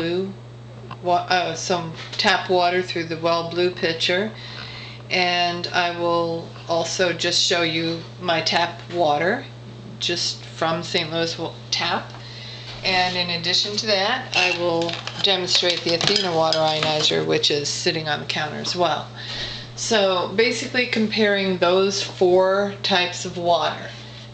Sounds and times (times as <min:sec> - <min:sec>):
Speech: 0:00.0 - 0:00.4, 0:01.0 - 0:04.4, 0:05.1 - 0:12.1, 0:12.8 - 0:19.1, 0:19.8 - 0:24.0.